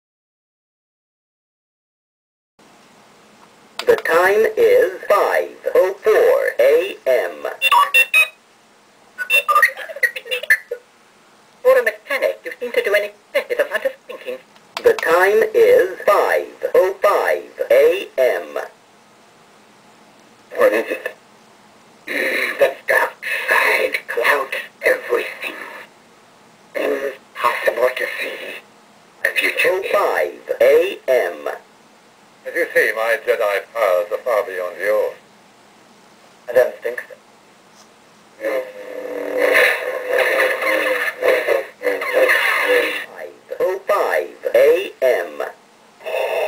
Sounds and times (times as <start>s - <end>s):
Speech: 3.8s - 7.7s, 9.5s - 10.8s, 11.6s - 18.8s, 20.5s - 21.2s, 22.5s - 25.9s, 26.8s - 28.6s, 29.2s - 31.7s, 32.5s - 35.2s, 36.5s - 37.2s, 38.4s - 46.4s.